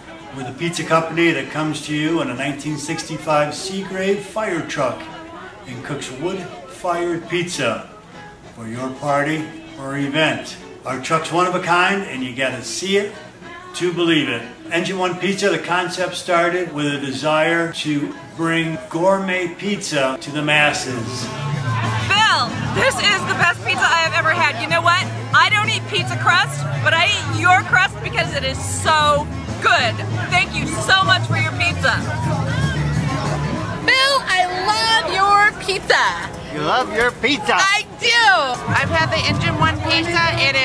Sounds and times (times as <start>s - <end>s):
Music: 0.0s - 40.6s.